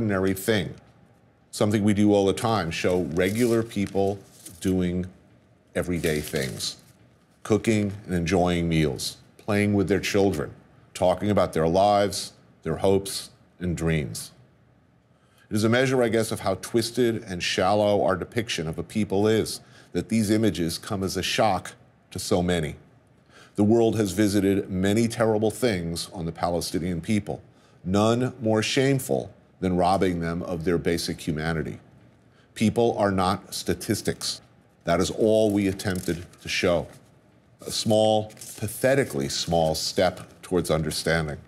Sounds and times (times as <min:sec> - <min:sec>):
Male speech, man speaking: 0:00.0 - 0:00.8, 0:01.5 - 0:06.8, 0:07.4 - 0:14.4, 0:15.5 - 0:22.8, 0:23.6 - 0:31.9, 0:32.6 - 0:37.0, 0:37.6 - 0:41.4.